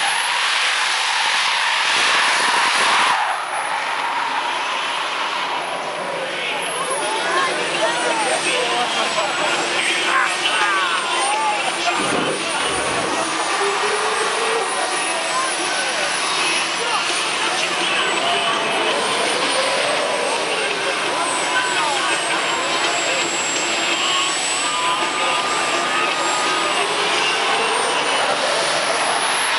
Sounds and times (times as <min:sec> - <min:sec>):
Car: 0:00.0 - 0:29.5
Speech: 0:05.9 - 0:29.5
Accelerating, revving, vroom: 0:18.9 - 0:20.4.